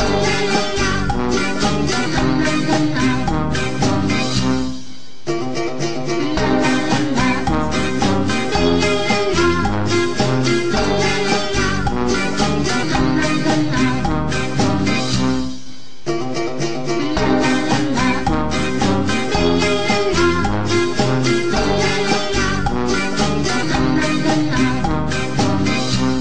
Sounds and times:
Music: 0.0 - 26.2.

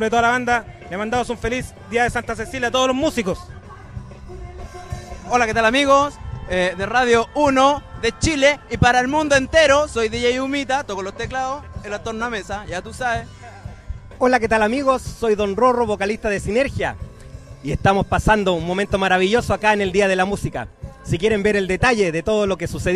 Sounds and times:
Speech: 0.0 - 3.5, 5.2 - 13.3, 14.2 - 17.0, 17.7 - 22.9
Music: 0.0 - 22.9.

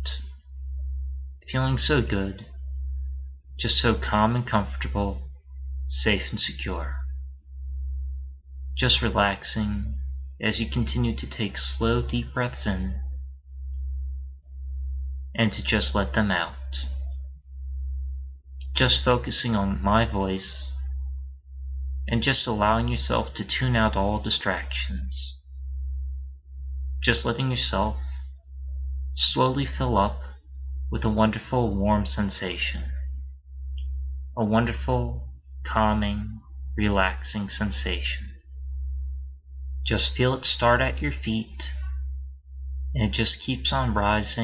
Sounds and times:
Speech: 0.0 - 0.3, 1.5 - 2.6, 3.6 - 5.3, 5.9 - 7.1, 8.8 - 13.1, 15.4 - 17.1, 18.8 - 20.9, 22.1 - 25.4, 27.0 - 28.2, 29.2 - 33.1, 34.4 - 38.4, 39.9 - 42.1, 43.0 - 44.4.

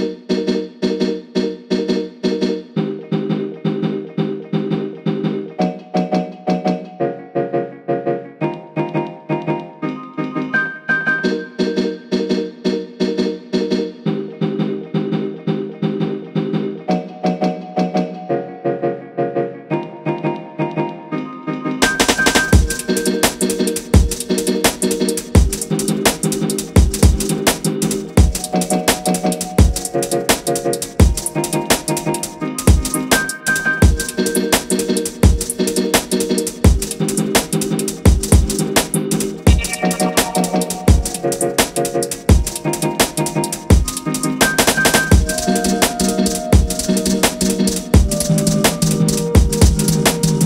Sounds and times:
Music: 0.0 - 50.4.

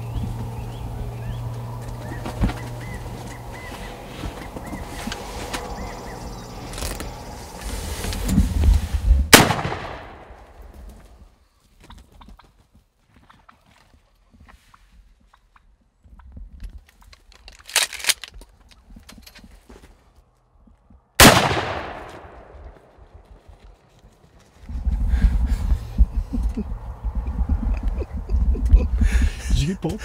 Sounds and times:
Bird: 0.0 - 7.8.

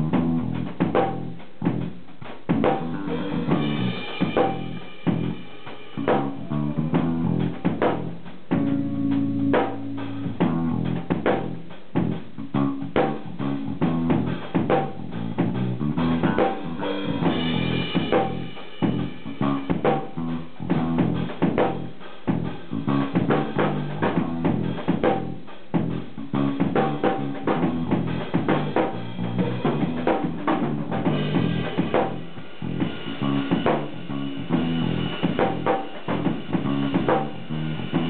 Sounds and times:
Drum: 0.0 - 38.0
Drum kit: 0.0 - 38.0.

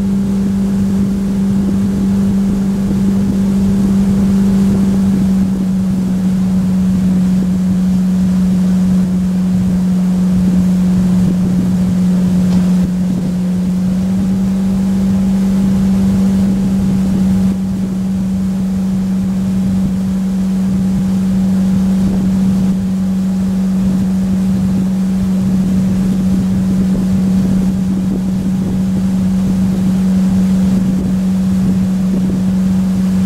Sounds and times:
Motorboat, speedboat: 0.0 - 33.2.

